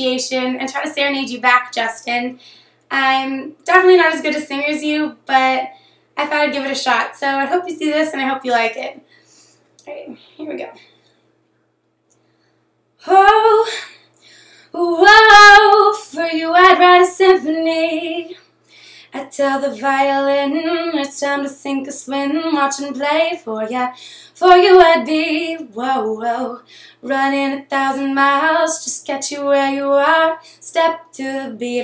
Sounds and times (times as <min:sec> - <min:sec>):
Female singing: 0:13.0 - 0:13.9, 0:14.8 - 0:18.4, 0:19.2 - 0:31.8.